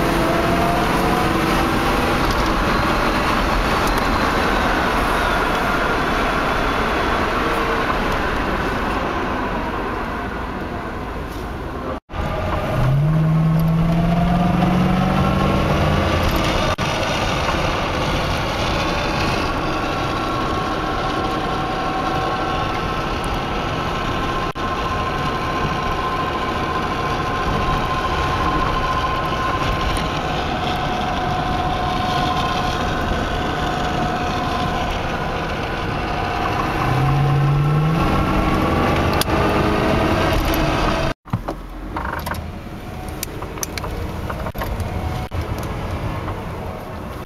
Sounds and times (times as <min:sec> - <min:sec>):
Car: 0:00.0 - 0:47.2.